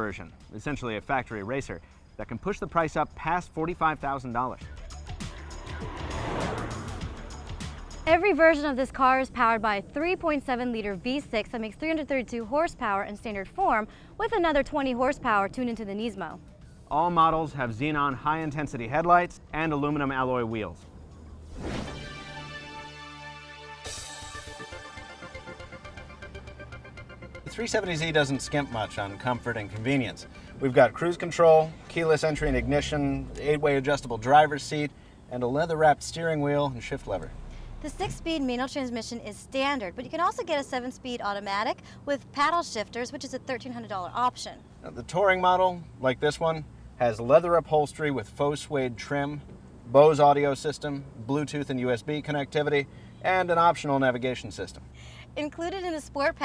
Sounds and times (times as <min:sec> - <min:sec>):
Music: 0:02.6 - 0:31.8
Car passing by: 0:04.6 - 0:08.1, 0:21.2 - 0:22.9, 0:31.7 - 0:38.8.